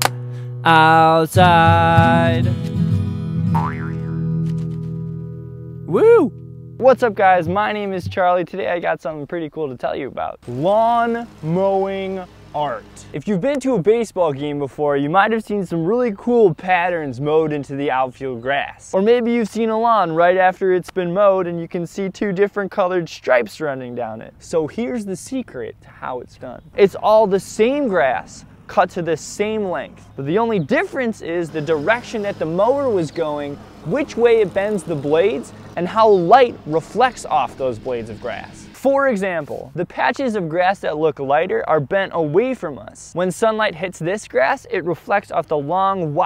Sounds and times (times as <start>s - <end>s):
Speech: 5.9s - 46.2s.